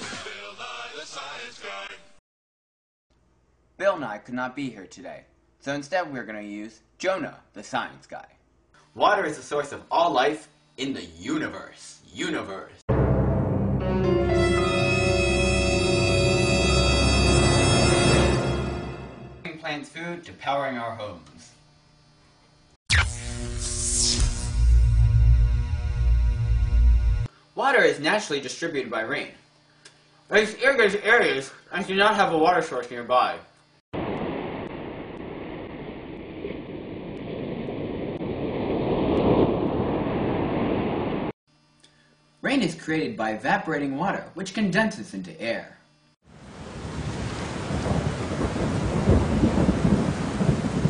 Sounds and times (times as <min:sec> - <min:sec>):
Speech: 0:03.8 - 0:08.4, 0:09.0 - 0:12.8, 0:19.5 - 0:21.5, 0:27.6 - 0:29.4, 0:30.3 - 0:33.5, 0:42.4 - 0:45.8.